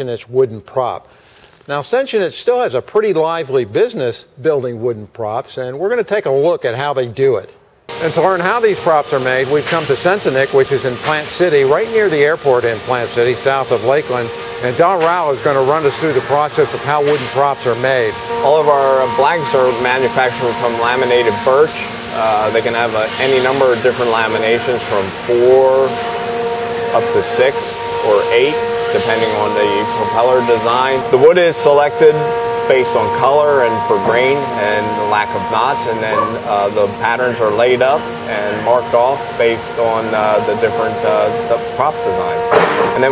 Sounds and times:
Speech: 0.0s - 1.1s, 1.7s - 26.0s, 27.0s - 43.1s.

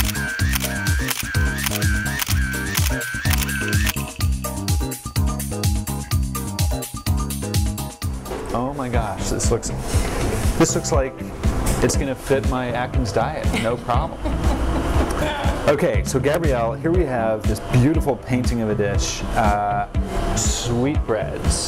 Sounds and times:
Music: 0.0s - 21.6s
Speech: 8.5s - 9.8s, 10.6s - 11.2s, 11.8s - 14.1s, 15.2s - 21.6s.

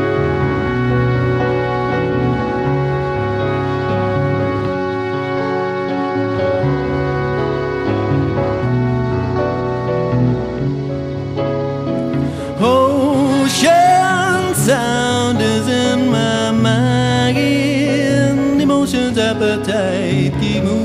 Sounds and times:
Music: 0.0s - 20.8s.

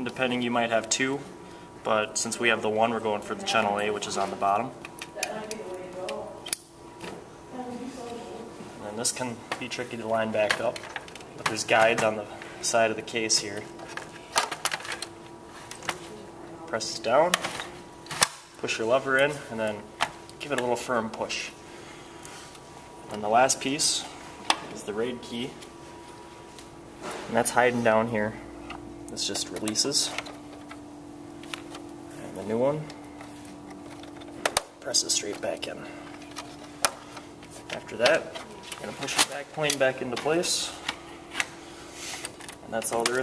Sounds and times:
Speech: 29.1s - 30.2s, 34.8s - 35.9s, 37.8s - 40.8s, 42.7s - 43.2s.

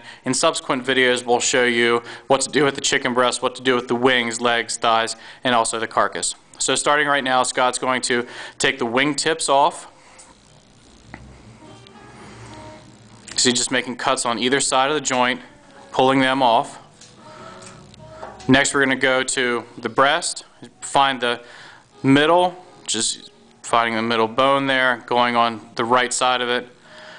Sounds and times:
Music: 0.0s - 27.1s
Speech: 0.2s - 9.9s, 13.3s - 16.8s, 18.5s - 21.4s, 22.0s - 26.8s.

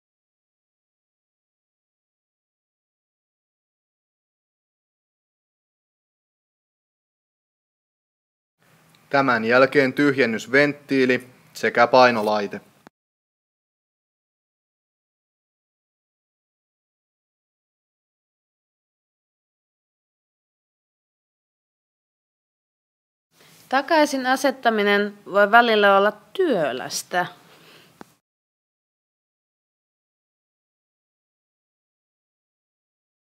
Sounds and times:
Speech: 9.1s - 12.7s, 23.7s - 27.4s.

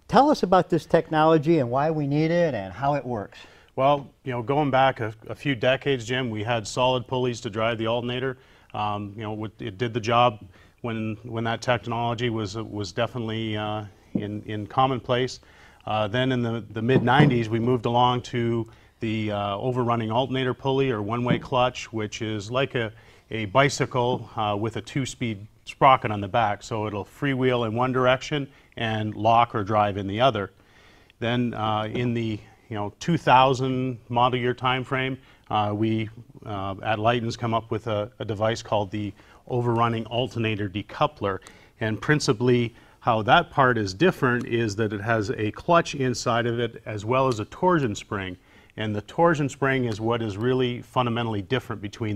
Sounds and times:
Speech: 0.1s - 30.6s, 31.2s - 52.1s.

